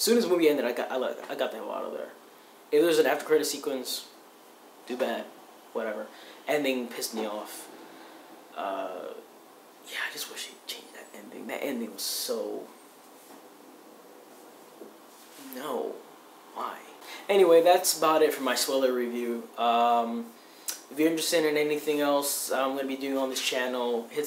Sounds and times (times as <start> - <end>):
Speech: 0.0 - 4.2, 4.9 - 7.7, 8.6 - 9.3, 9.9 - 12.7, 15.4 - 24.2
Inside, small room: 0.0 - 24.2.